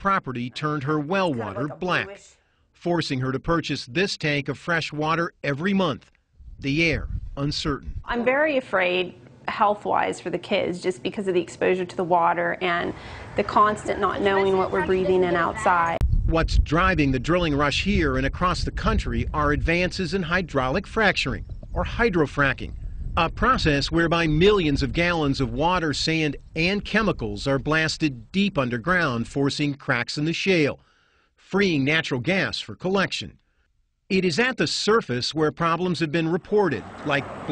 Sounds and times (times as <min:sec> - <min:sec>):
Speech: 0:00.0 - 0:06.0, 0:06.6 - 0:30.8, 0:31.5 - 0:33.4, 0:34.1 - 0:37.5.